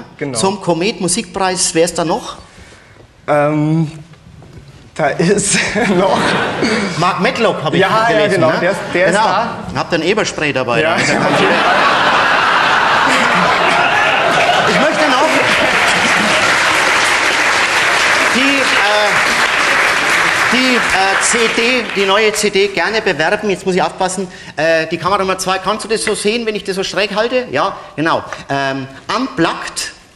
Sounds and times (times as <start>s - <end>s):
Speech: 0.0s - 2.4s, 7.0s - 11.6s, 14.6s - 15.7s, 18.3s - 19.3s, 20.5s - 30.0s
Applause: 13.1s - 22.5s.